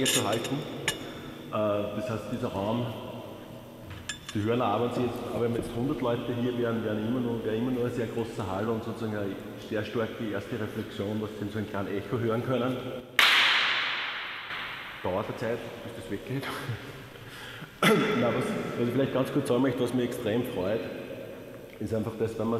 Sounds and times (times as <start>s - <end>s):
Speech: 0.0s - 0.7s, 1.6s - 3.0s, 4.3s - 12.9s, 15.0s - 16.8s, 17.8s - 21.0s, 21.8s - 22.5s.